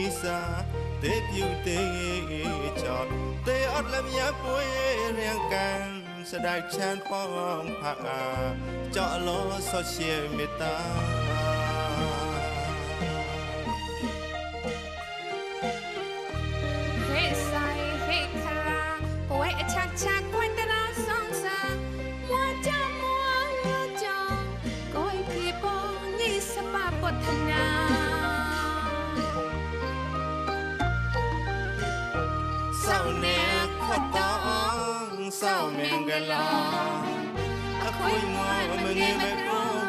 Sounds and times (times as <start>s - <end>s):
Traditional music: 0.0s - 39.8s.